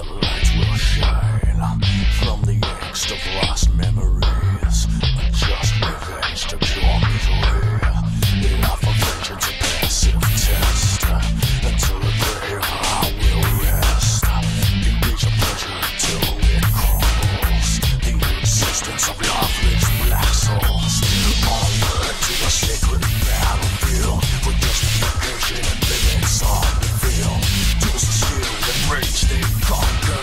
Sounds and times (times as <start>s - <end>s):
Music: 0.0s - 30.2s.